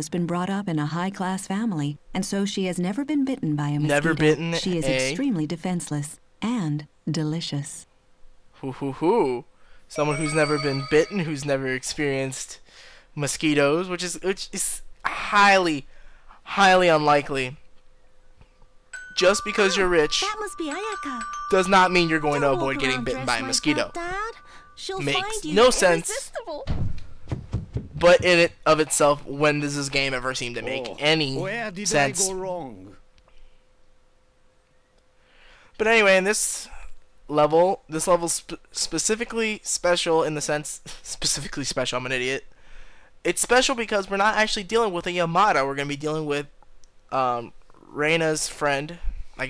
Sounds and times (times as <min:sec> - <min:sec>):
Speech: 0:00.0 - 0:07.8, 0:08.6 - 0:12.6, 0:13.2 - 0:15.8, 0:16.5 - 0:17.6, 0:19.2 - 0:26.7, 0:28.0 - 0:33.0, 0:35.8 - 0:42.4, 0:43.3 - 0:46.5, 0:47.1 - 0:49.5
Music: 0:19.0 - 0:26.2.